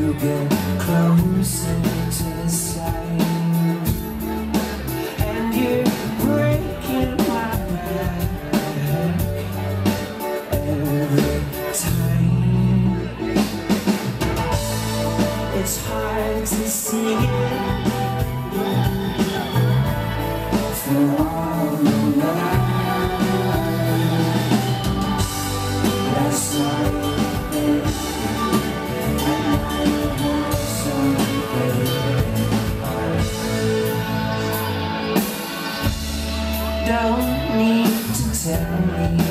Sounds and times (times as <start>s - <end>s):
Music: 0.0s - 39.3s.